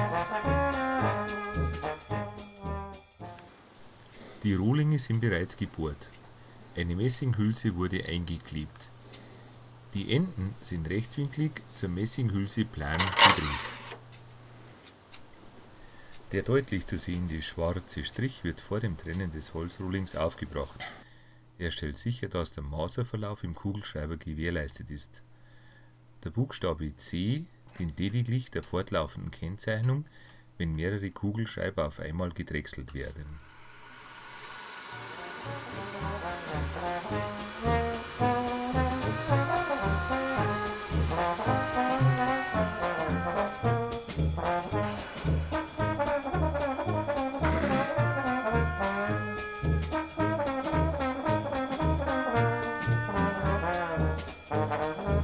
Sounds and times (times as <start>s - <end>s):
Speech: 4.4s - 6.2s, 6.8s - 9.0s, 9.9s - 13.8s, 16.3s - 20.9s, 21.6s - 25.3s, 26.2s - 33.4s.